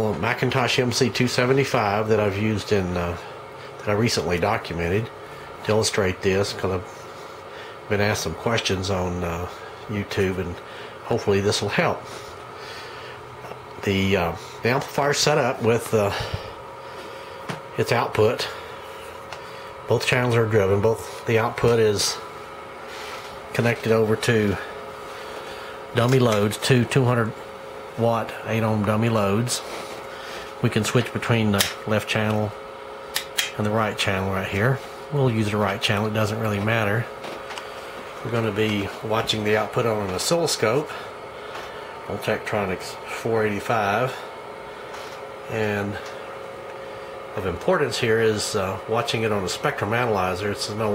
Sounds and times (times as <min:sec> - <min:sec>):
Speech: 0:00.0 - 0:06.9, 0:07.9 - 0:12.1, 0:13.8 - 0:16.5, 0:17.8 - 0:18.6, 0:19.9 - 0:22.3, 0:23.5 - 0:24.8, 0:25.9 - 0:27.4, 0:28.0 - 0:29.7, 0:30.6 - 0:32.6, 0:33.4 - 0:37.2, 0:38.2 - 0:41.0, 0:42.1 - 0:44.3, 0:45.5 - 0:46.1, 0:47.4 - 0:50.9.